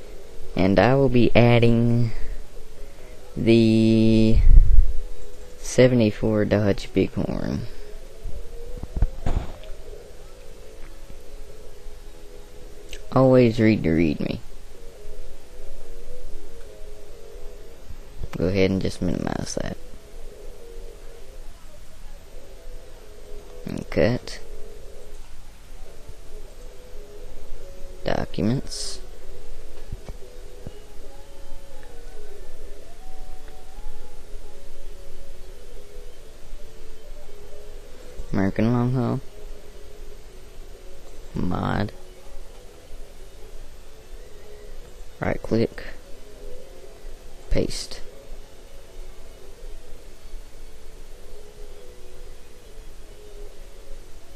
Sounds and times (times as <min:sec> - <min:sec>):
Speech: 0:00.6 - 0:02.2, 0:03.4 - 0:04.5, 0:05.6 - 0:07.7, 0:13.0 - 0:14.4, 0:18.4 - 0:19.8, 0:23.7 - 0:24.4, 0:28.0 - 0:29.0, 0:38.3 - 0:39.2, 0:41.4 - 0:42.0, 0:45.2 - 0:46.0, 0:47.5 - 0:48.1.